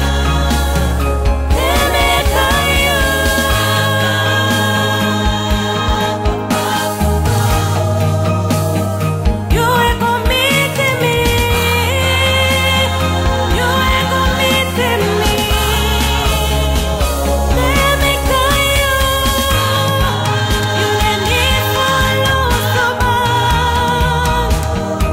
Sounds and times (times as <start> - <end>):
Gospel music: 0.0 - 25.1
Singing: 0.0 - 25.1.